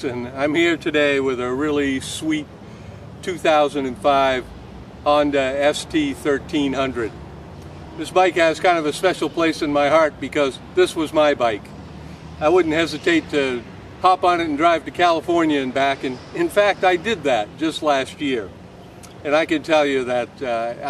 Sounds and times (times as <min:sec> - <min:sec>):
Speech: 0:00.0 - 0:02.4, 0:03.2 - 0:04.4, 0:05.1 - 0:07.1, 0:08.0 - 0:11.7, 0:12.4 - 0:18.5, 0:19.2 - 0:20.8.